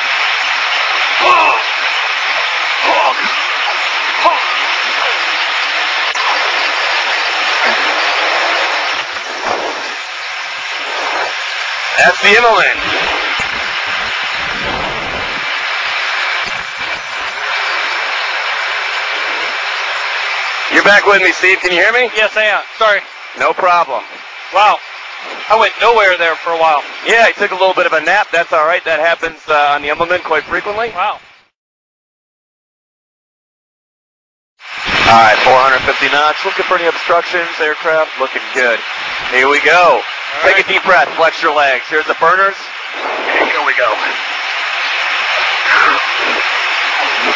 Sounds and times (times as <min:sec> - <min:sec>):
Speech: 0:12.0 - 0:12.8, 0:20.7 - 0:24.0, 0:24.6 - 0:24.8, 0:25.5 - 0:31.2, 0:35.1 - 0:42.7, 0:43.3 - 0:44.2.